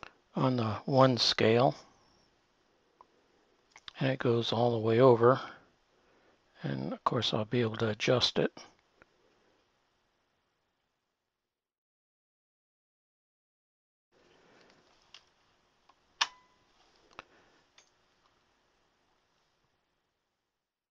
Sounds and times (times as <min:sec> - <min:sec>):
Silence: 0:01.7 - 0:03.7, 0:08.6 - 0:11.4, 0:14.2 - 0:20.8.